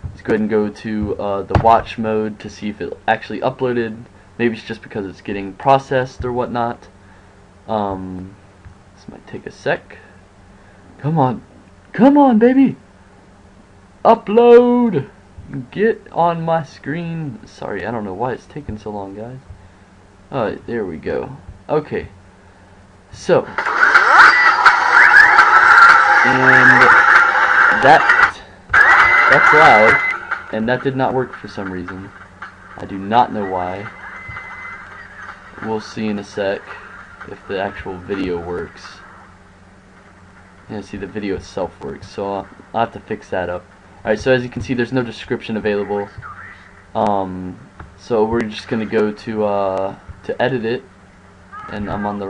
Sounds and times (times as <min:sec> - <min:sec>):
Speech: 0:00.2 - 0:06.9, 0:07.7 - 0:08.4, 0:09.0 - 0:10.1, 0:11.0 - 0:12.8, 0:14.0 - 0:19.5, 0:20.3 - 0:22.2, 0:23.1 - 0:23.6, 0:26.2 - 0:27.1, 0:27.7 - 0:32.1, 0:32.8 - 0:33.9, 0:35.6 - 0:39.0, 0:40.7 - 0:46.2, 0:47.0 - 0:50.9, 0:51.6 - 0:52.2.